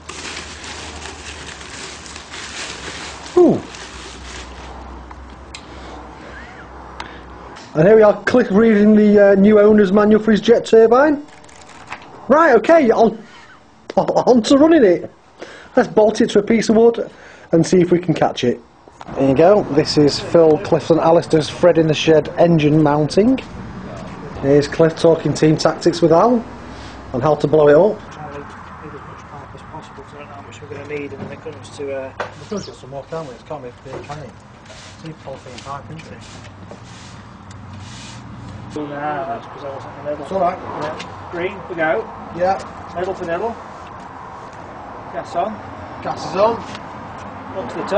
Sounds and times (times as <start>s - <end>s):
Speech: 7.7s - 11.2s, 12.3s - 13.2s, 14.1s - 15.1s, 15.8s - 23.5s, 24.4s - 26.5s, 27.1s - 34.4s, 35.0s - 36.2s, 47.6s - 47.9s.